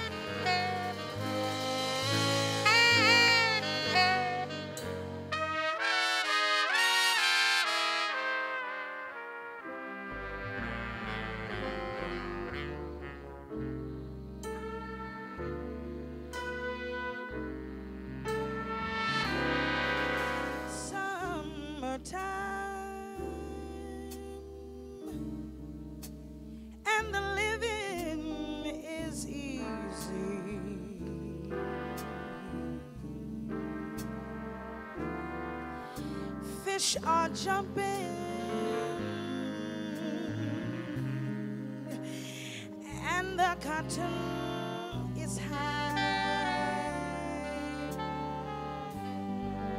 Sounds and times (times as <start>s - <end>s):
Saxophone: 0.0s - 26.2s, 27.3s - 49.7s
Brass instrument: 0.0s - 26.8s, 27.5s - 49.7s.